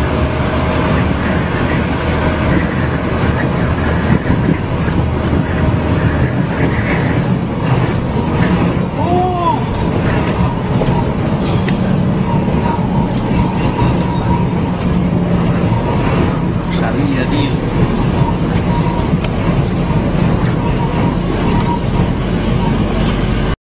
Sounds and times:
Truck: 0.0 - 23.6
Speech: 16.7 - 17.6.

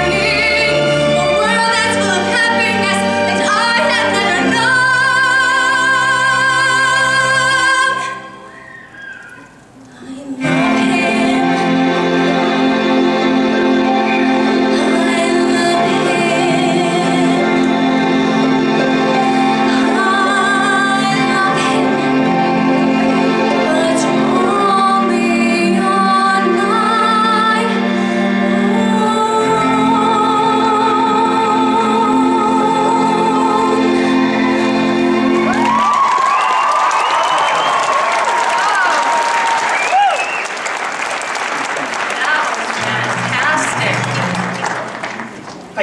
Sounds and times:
Music: 0.0 - 41.3, 42.5 - 45.8
Applause: 35.5 - 45.8.

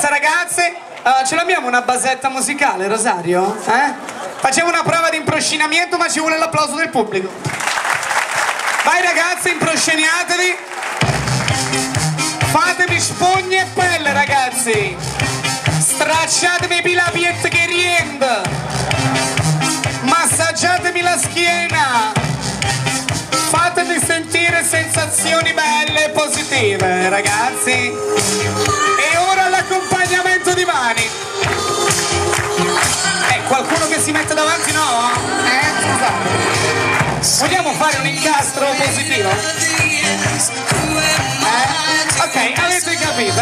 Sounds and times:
Speech: 0.0 - 7.4, 8.9 - 10.6, 12.5 - 15.0, 15.8 - 18.5, 20.0 - 22.2, 23.5 - 27.9, 29.0 - 31.1, 33.3 - 36.2, 37.3 - 39.4, 41.4 - 43.4
Music: 10.9 - 43.4.

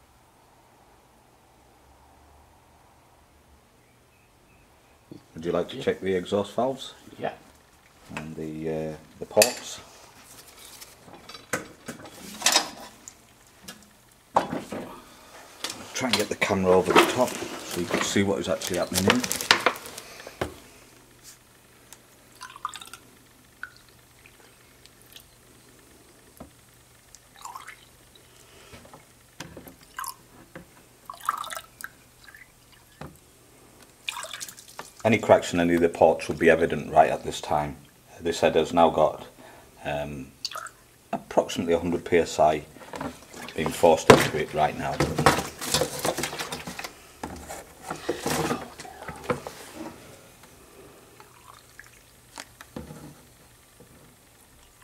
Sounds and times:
Inside, small room: 0.0 - 54.8
Speech: 5.3 - 7.4, 8.1 - 9.8, 15.9 - 19.4, 35.0 - 40.3, 41.2 - 42.7, 43.5 - 45.2.

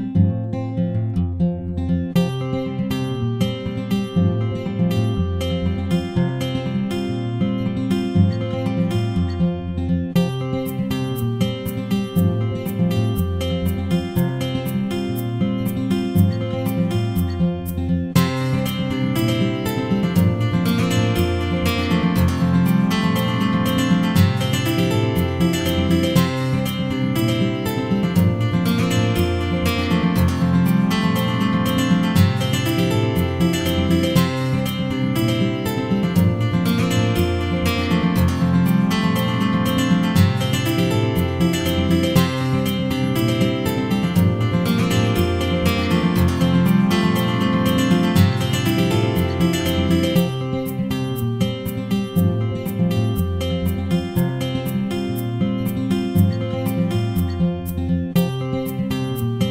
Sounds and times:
Music: 0.0 - 59.5.

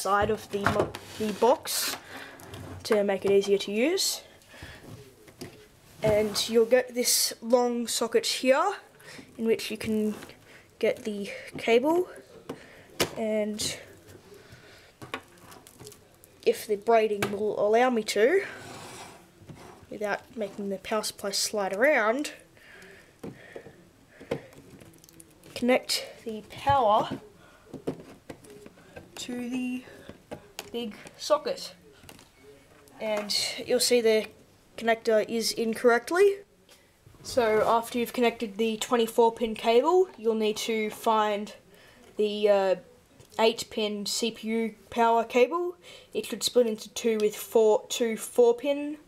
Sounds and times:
Speech: 0.0 - 2.0, 2.8 - 4.3, 5.0 - 14.5, 15.8 - 18.6, 19.9 - 22.4, 25.5 - 27.3, 28.8 - 30.0, 30.6 - 31.8, 33.0 - 36.5, 37.2 - 41.6, 42.2 - 49.0.

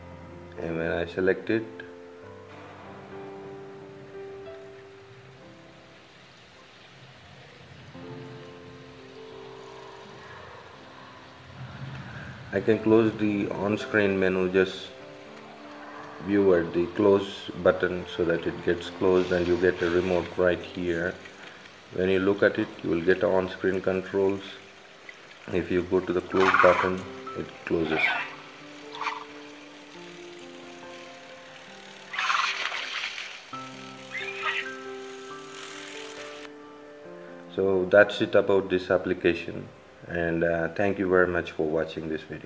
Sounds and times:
Music: 0.0 - 42.4
Speech: 0.6 - 1.9, 12.5 - 14.9, 16.2 - 21.2, 21.9 - 24.6, 25.5 - 28.2, 37.5 - 42.4.

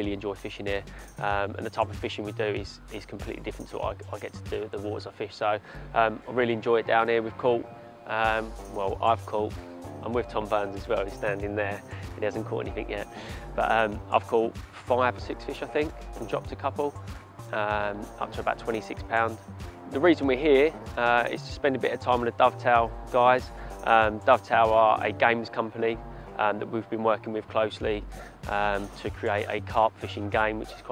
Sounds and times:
Music: 0.0 - 30.9
Speech: 0.0 - 30.9.

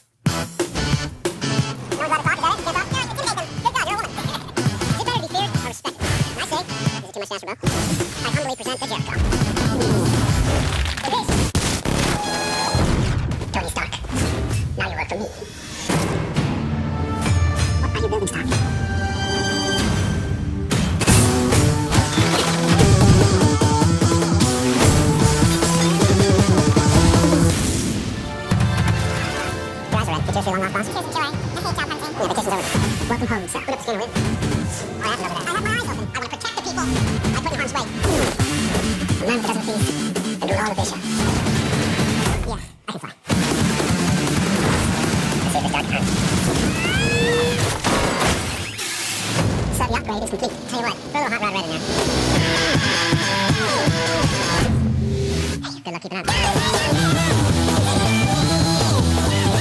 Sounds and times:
Music: 0.0 - 42.7, 43.3 - 59.6
Speech: 2.0 - 4.2, 4.9 - 7.6, 8.2 - 9.2, 13.5 - 14.1, 14.8 - 15.5, 17.8 - 18.5, 29.9 - 34.2, 35.0 - 38.4, 39.2 - 41.0, 42.3 - 43.2, 49.7 - 51.8, 55.6 - 57.0.

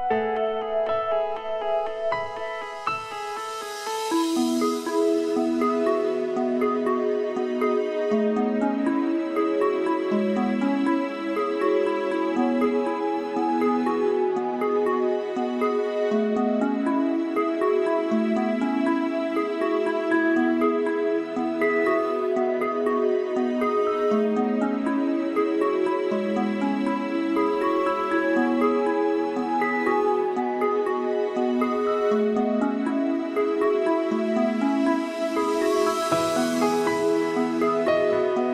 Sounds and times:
Background music: 0.0 - 38.5.

